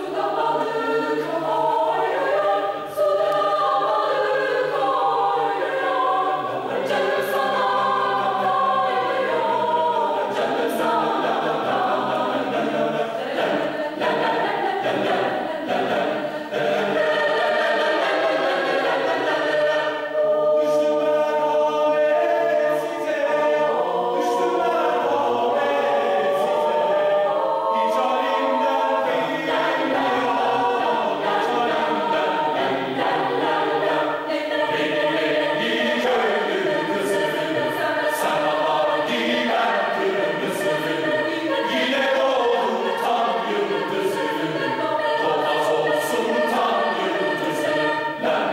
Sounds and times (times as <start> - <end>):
Choir: 0.0 - 48.5.